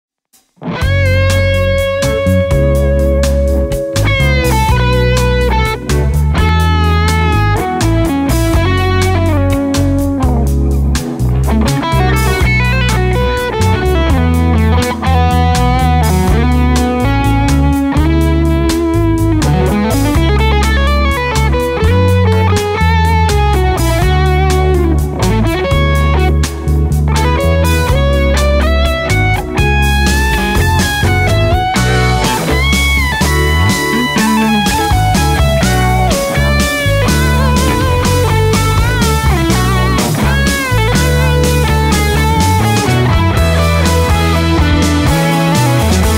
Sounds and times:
Electric guitar: 0:00.6 - 0:46.1.

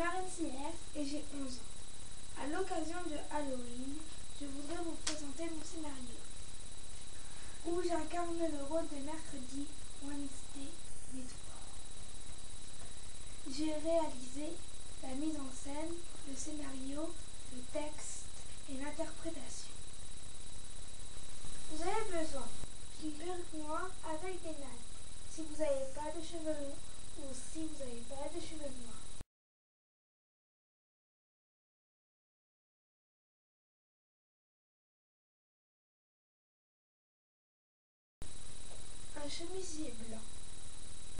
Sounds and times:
Speech: 0:00.0 - 0:01.6, 0:02.4 - 0:06.3, 0:07.6 - 0:11.8, 0:13.4 - 0:19.7, 0:21.7 - 0:29.0, 0:39.2 - 0:40.3.

